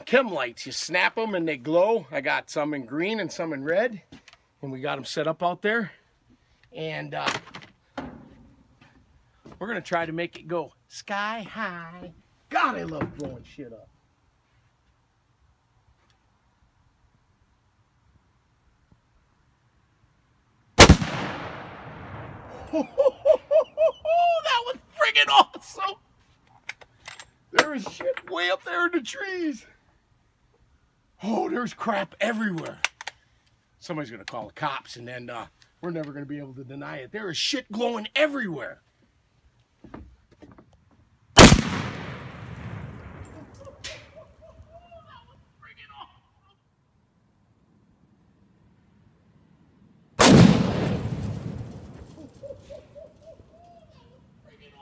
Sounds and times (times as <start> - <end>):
Firecracker: 20.8 - 22.7, 50.2 - 52.6.